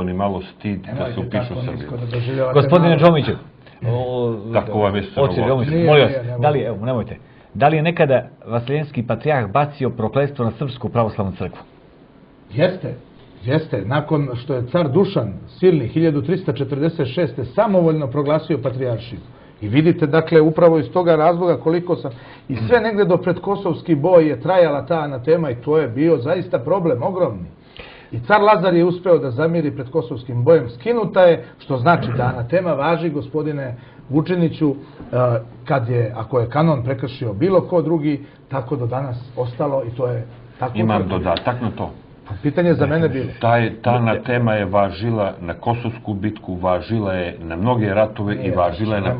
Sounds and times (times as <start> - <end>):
Speech: 0.0 - 11.7, 12.5 - 49.1.